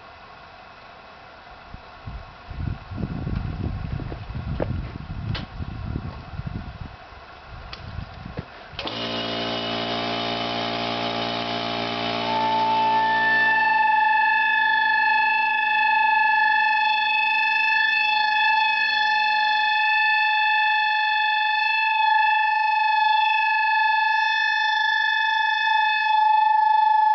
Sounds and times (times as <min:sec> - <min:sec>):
Air horn, truck horn: 0:08.9 - 0:27.1.